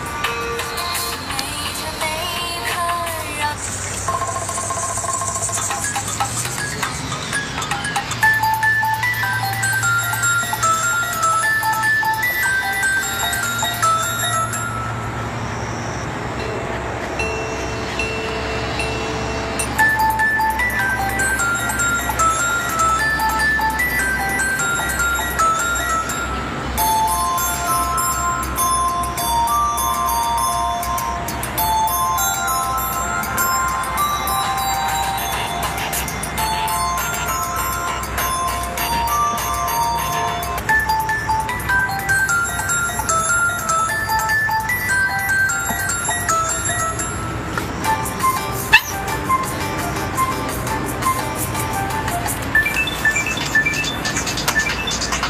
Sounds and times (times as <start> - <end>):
Music: 0.0 - 15.2, 17.2 - 55.2.